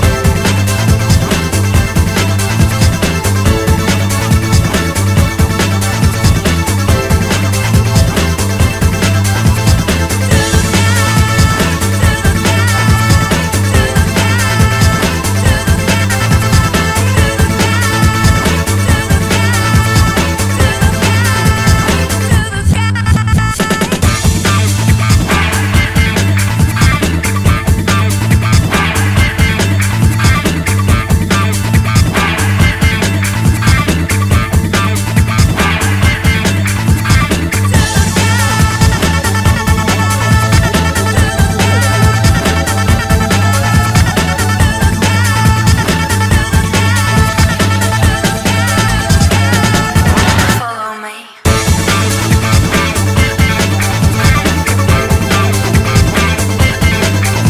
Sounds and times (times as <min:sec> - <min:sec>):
Music: 0:00.0 - 0:57.5.